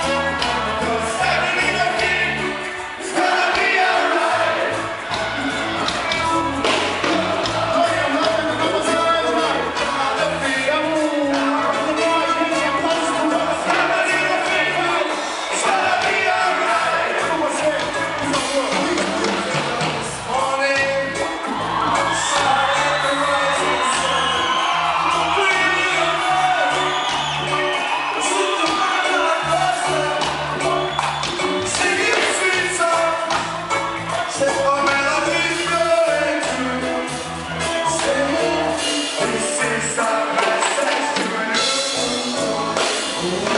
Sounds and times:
Music: 0:00.0 - 0:43.5.

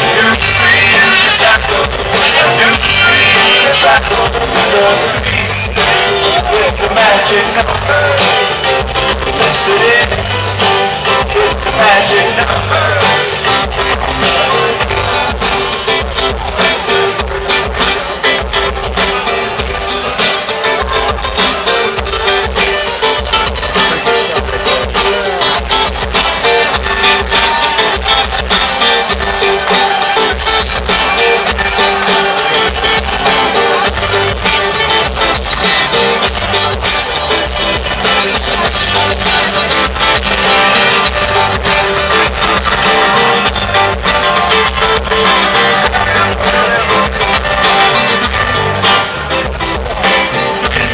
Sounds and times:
Singing: 0:00.0 - 0:10.4, 0:11.1 - 0:15.1, 0:42.5 - 0:49.2.

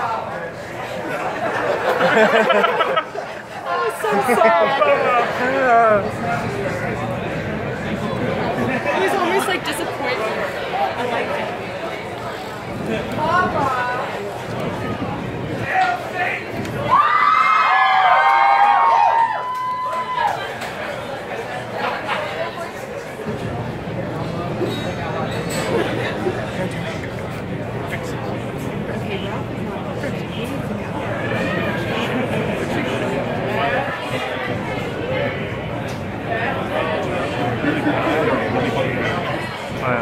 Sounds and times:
Speech: 0:20.4 - 0:40.0.

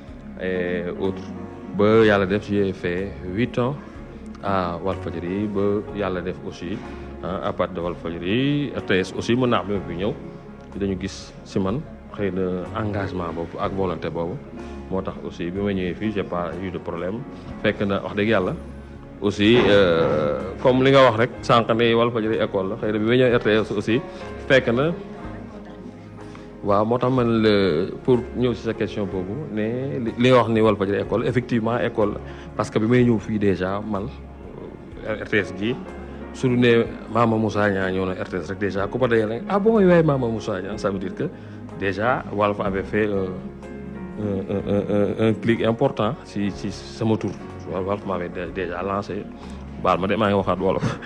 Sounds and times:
Music: 0:00.0 - 0:51.0
Speech: 0:04.4 - 0:10.2, 0:19.2 - 0:25.0, 0:36.4 - 0:43.4, 0:44.2 - 0:51.0.

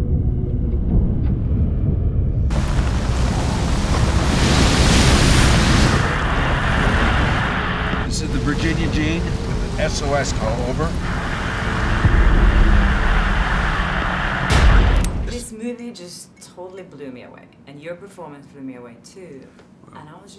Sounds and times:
Outside, rural or natural: 0:02.1 - 0:15.4
Speech: 0:08.1 - 0:10.9, 0:15.3 - 0:20.3.

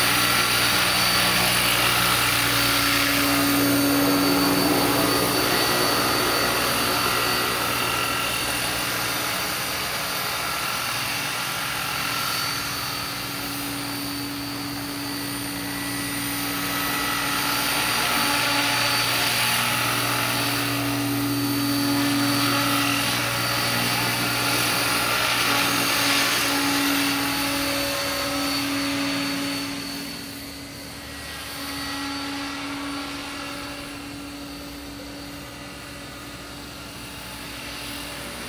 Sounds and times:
Helicopter: 0:00.0 - 0:38.4
Light engine (high frequency): 0:00.0 - 0:38.4.

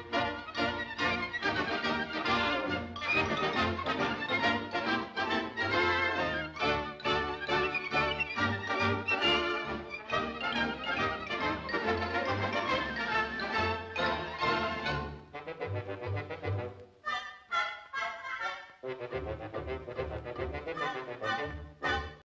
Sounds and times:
Music: 0:00.0 - 0:22.2.

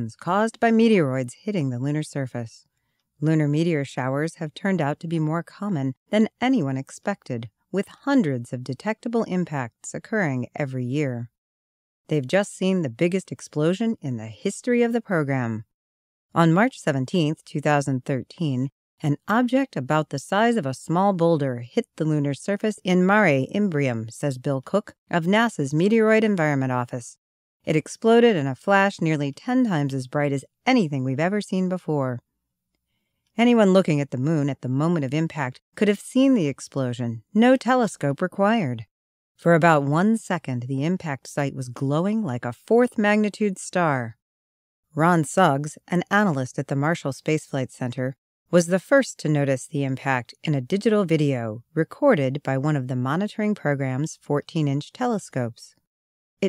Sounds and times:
Speech: 0:00.0 - 0:11.4, 0:12.1 - 0:15.7, 0:16.4 - 0:32.2, 0:33.4 - 0:44.2, 0:45.0 - 0:55.8.

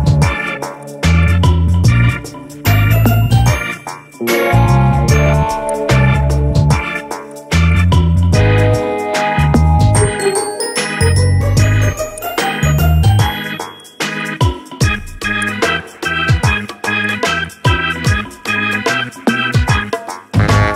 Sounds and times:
Music: 0:00.0 - 0:20.7.

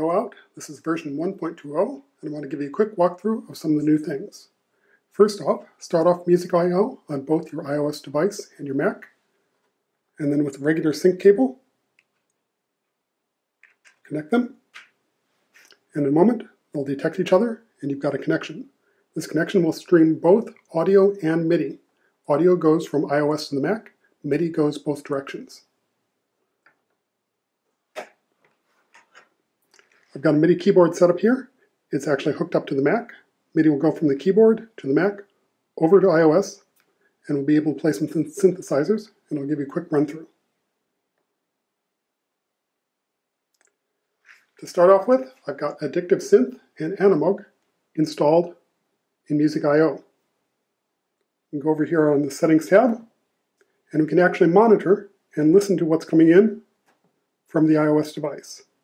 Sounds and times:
Speech: 0:00.0 - 0:09.2, 0:10.2 - 0:11.6, 0:14.0 - 0:14.6, 0:15.6 - 0:25.7, 0:30.1 - 0:40.4, 0:44.3 - 0:48.6, 0:49.3 - 0:50.1, 0:51.6 - 0:53.1, 0:53.9 - 0:56.7, 0:57.5 - 0:58.8.

